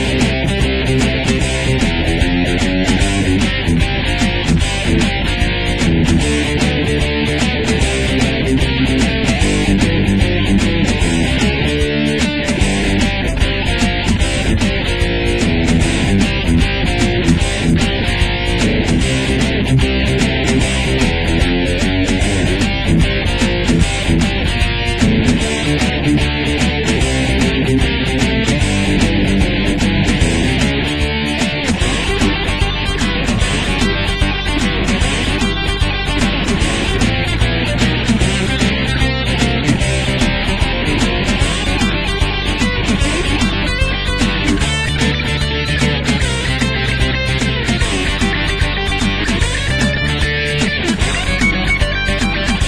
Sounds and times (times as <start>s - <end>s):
Heavy metal: 0.0s - 52.6s
Punk rock: 0.0s - 52.6s
Rock and roll: 0.0s - 52.6s.